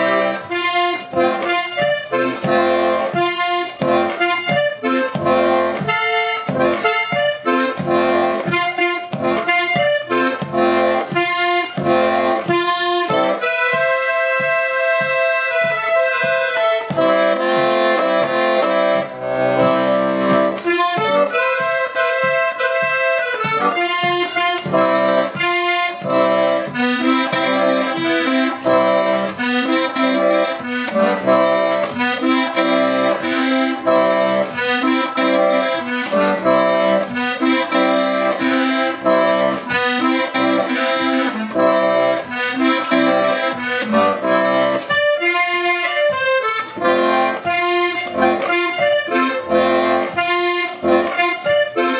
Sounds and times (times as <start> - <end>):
Accordion: 0.0 - 51.9.